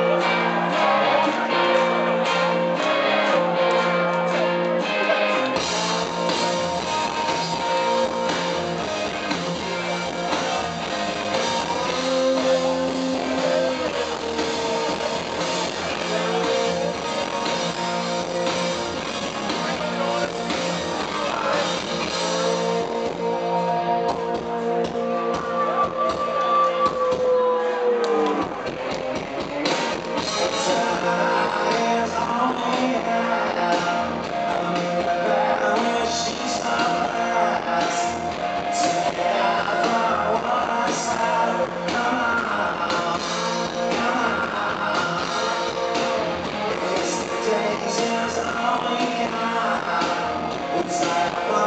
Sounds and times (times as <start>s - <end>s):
Music: 0.0s - 51.6s
Speech: 12.2s - 22.8s.